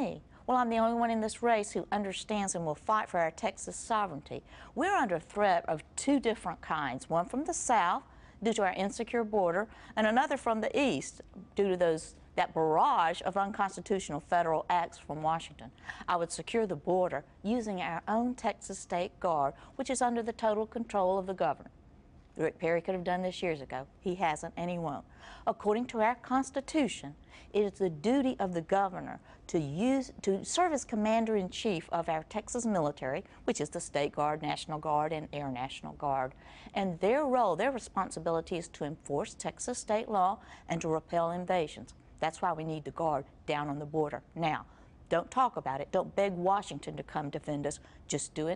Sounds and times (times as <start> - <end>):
Speech: 0.0 - 21.7, 22.4 - 48.5.